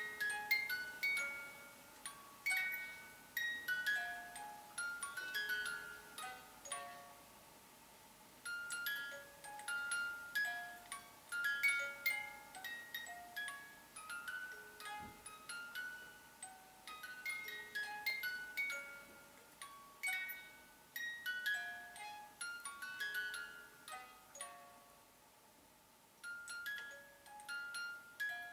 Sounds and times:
Music: 0.0 - 7.4, 8.4 - 25.1, 26.2 - 28.5
Inside, small room: 0.0 - 28.5.

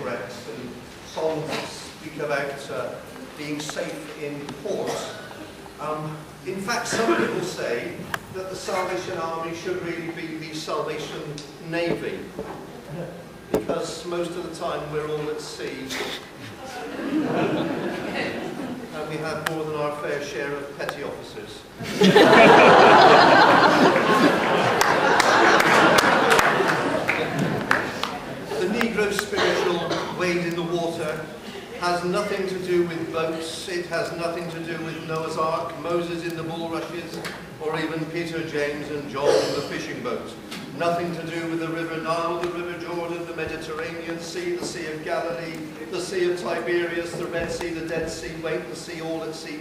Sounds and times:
Speech: 0.0 - 12.3, 12.9 - 17.0, 18.1 - 21.7, 28.4 - 49.6.

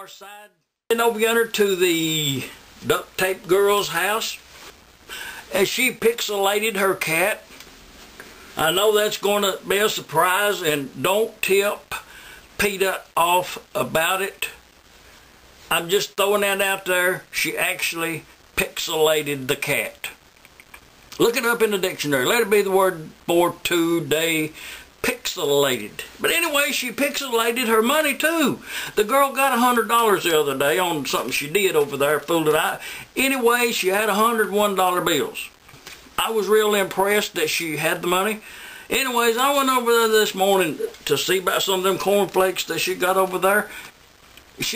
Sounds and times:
Speech: 0.0 - 4.4, 5.5 - 7.5, 8.6 - 14.6, 15.7 - 20.2, 21.2 - 35.6, 36.2 - 43.7, 44.6 - 44.7.

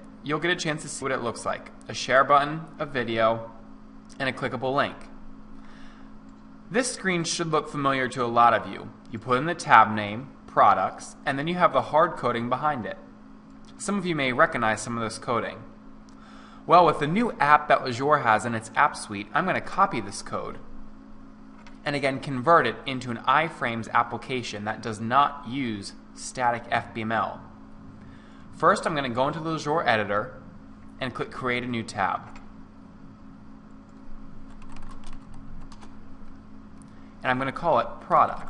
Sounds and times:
Speech: 0.3 - 3.5, 4.1 - 5.1, 6.7 - 13.1, 13.7 - 15.7, 16.7 - 20.6, 21.8 - 27.5, 28.6 - 30.4, 31.0 - 32.4, 37.2 - 38.4.

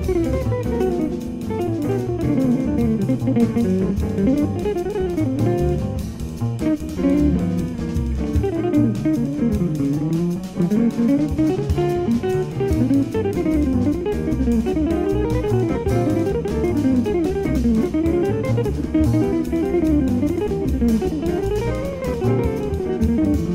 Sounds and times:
Electric guitar: 0.0 - 23.5.

